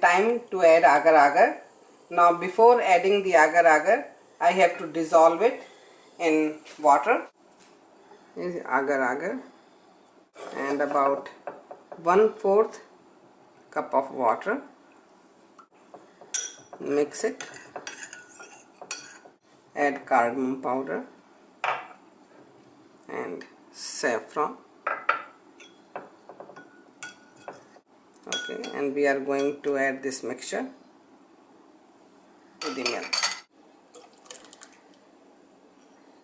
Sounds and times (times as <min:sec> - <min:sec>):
Speech: 0:00.0 - 0:05.6, 0:06.2 - 0:07.3, 0:08.4 - 0:09.5, 0:10.4 - 0:11.3, 0:12.0 - 0:12.9, 0:13.7 - 0:14.7, 0:16.8 - 0:17.5, 0:19.8 - 0:21.1, 0:23.1 - 0:24.6, 0:28.2 - 0:30.8, 0:32.6 - 0:33.2.